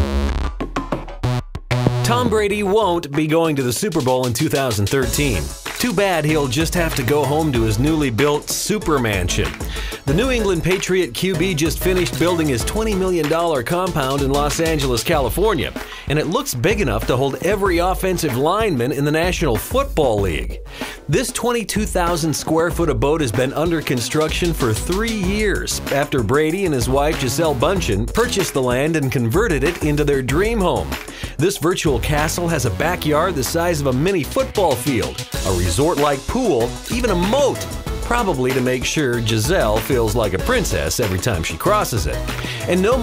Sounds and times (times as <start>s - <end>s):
Music: 0.0s - 43.0s
Speech: 2.0s - 43.0s.